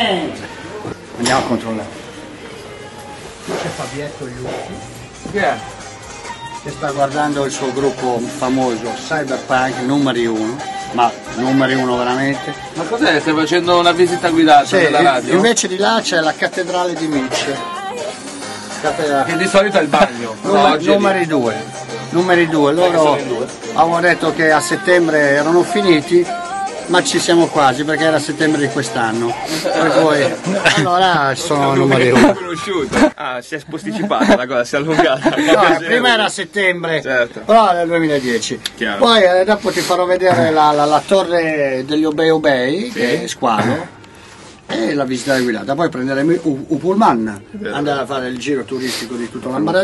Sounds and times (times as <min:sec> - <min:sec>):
Music: 0:00.0 - 0:33.3, 0:33.9 - 0:49.8.